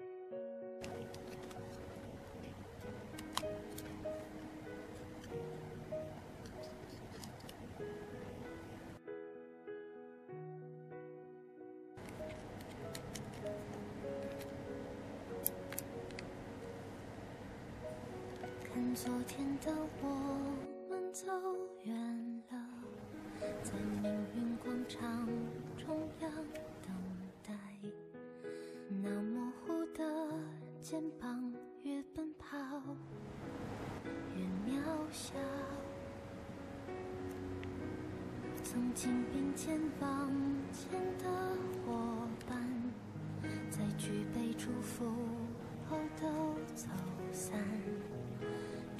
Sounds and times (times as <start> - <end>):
Music: 0.0 - 49.0.